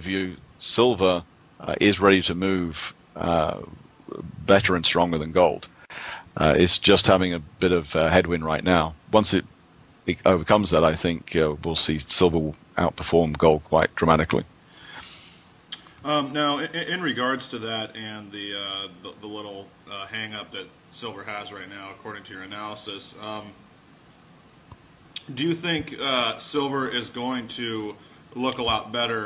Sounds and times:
Speech: 0.0s - 5.7s, 6.3s - 9.5s, 10.1s - 23.6s, 25.2s - 29.2s.

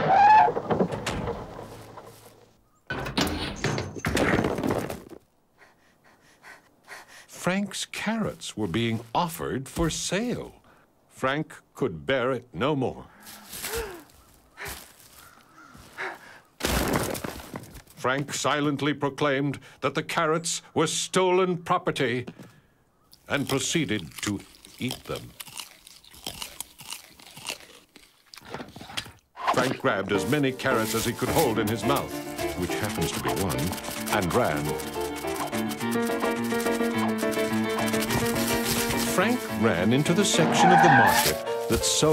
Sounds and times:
Speech: 7.4s - 10.6s, 11.2s - 13.1s, 18.0s - 22.3s, 23.3s - 25.3s, 29.5s - 34.8s, 39.1s - 42.1s
Music: 30.1s - 42.1s.

